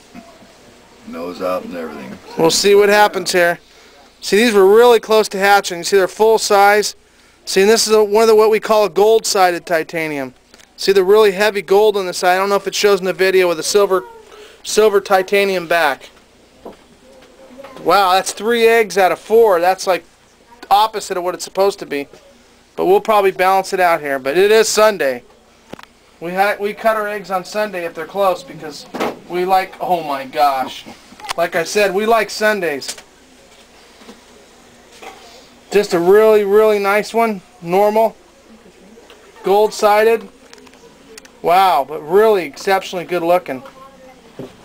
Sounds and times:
Inside, small room: 0.0s - 44.6s.

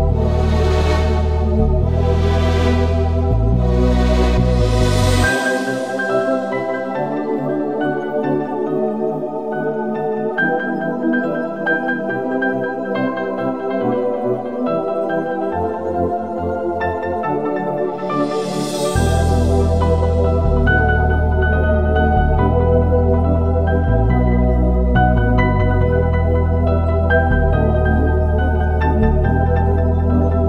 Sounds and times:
Music: 0.0s - 30.4s.

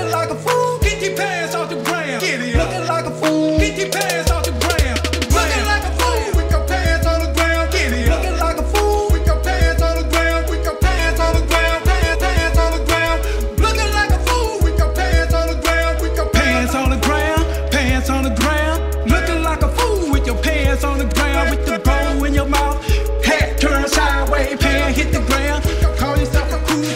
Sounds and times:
Reggae: 0.0s - 26.9s
Singing: 0.0s - 26.9s.

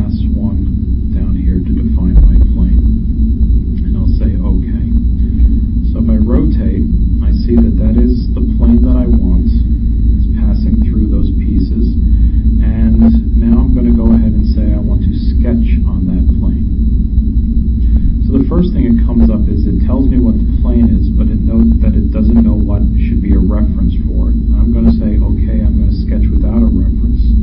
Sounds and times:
Speech: 0.0s - 2.8s, 3.8s - 5.0s, 5.8s - 12.0s, 12.6s - 16.7s, 18.2s - 27.4s.

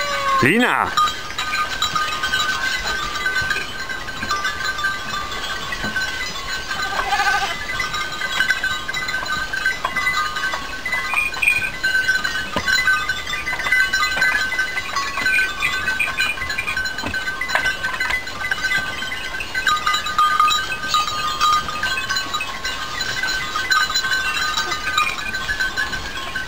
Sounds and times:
Goat: 0.0s - 3.7s, 6.7s - 7.6s, 23.0s - 26.2s
Sheep: 0.0s - 3.7s, 6.7s - 7.7s.

